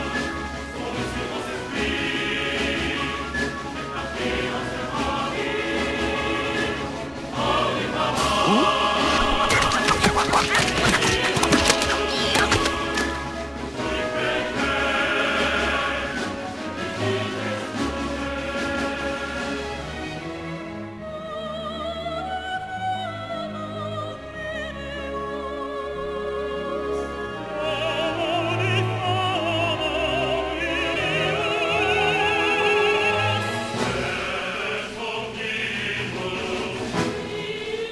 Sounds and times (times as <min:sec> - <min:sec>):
Music: 0:00.0 - 0:37.9.